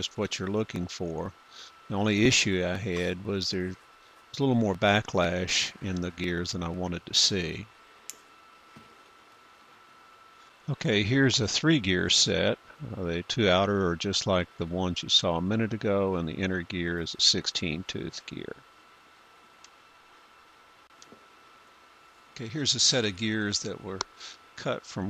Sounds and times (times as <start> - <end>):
Speech: 0.0 - 7.7, 10.7 - 18.6, 22.4 - 25.1.